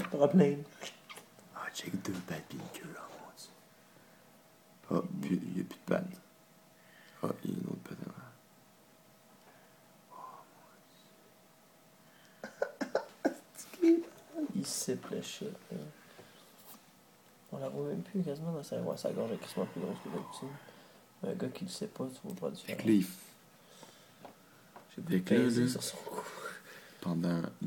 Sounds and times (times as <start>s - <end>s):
Speech: 0.0s - 0.7s, 1.6s - 3.6s, 4.8s - 6.3s, 7.2s - 8.4s, 13.6s - 16.0s, 17.5s - 23.4s, 24.9s - 27.6s.